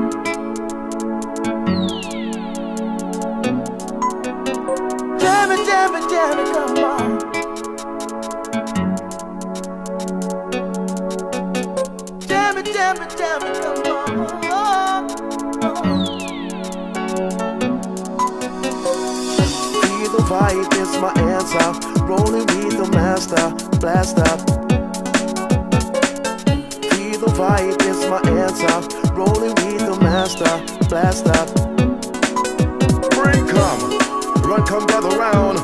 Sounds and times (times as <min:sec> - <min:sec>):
Music: 0:00.0 - 0:35.6.